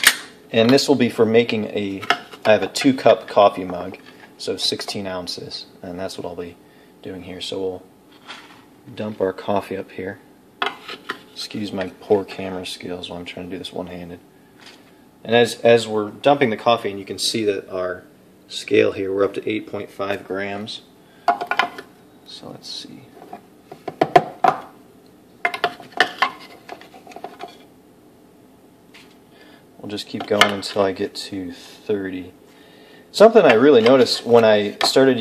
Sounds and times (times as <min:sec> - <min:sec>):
Speech: 0:00.5 - 0:07.9, 0:08.9 - 0:10.3, 0:11.4 - 0:14.2, 0:15.2 - 0:20.9, 0:22.3 - 0:23.2, 0:29.8 - 0:32.4, 0:33.1 - 0:35.2.